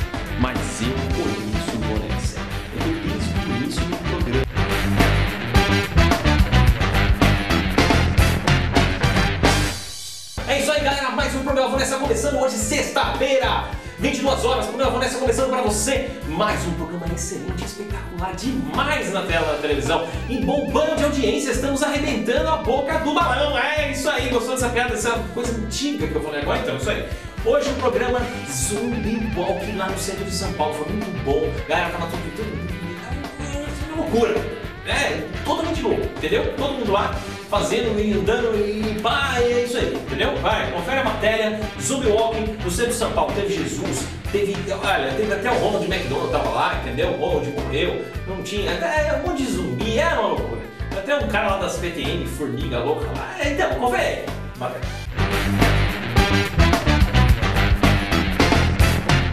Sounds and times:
Music: 0.0 - 59.3
Speech: 0.4 - 4.7, 10.4 - 55.0.

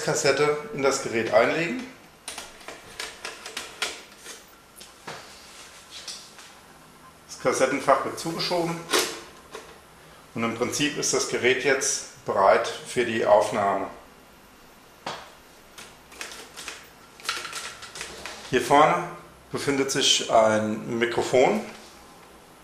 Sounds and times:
Speech: 0.0 - 2.0, 7.3 - 9.0, 10.4 - 14.0, 18.5 - 21.8.

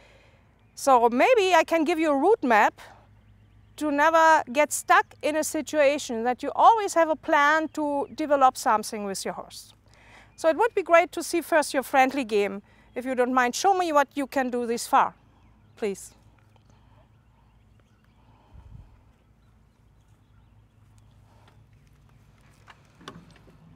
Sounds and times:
Speech: 0.8 - 2.9, 3.8 - 9.7, 10.4 - 15.1, 15.8 - 16.2.

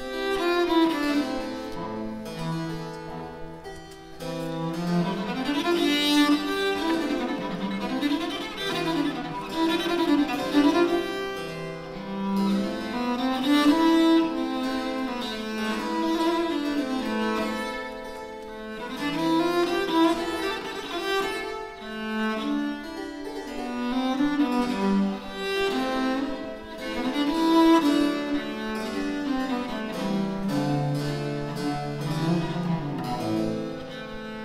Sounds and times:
Bowed string instrument: 0.0 - 34.4.

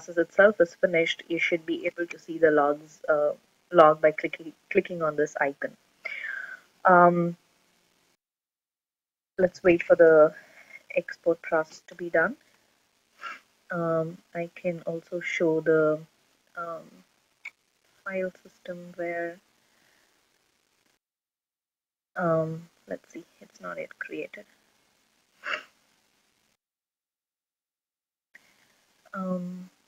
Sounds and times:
Speech: 0.0 - 7.4, 9.4 - 12.4, 13.7 - 17.0, 18.1 - 19.4, 22.2 - 24.4, 29.2 - 29.7
Inside, small room: 0.0 - 8.2, 9.4 - 21.0, 22.2 - 26.6, 28.4 - 29.8.

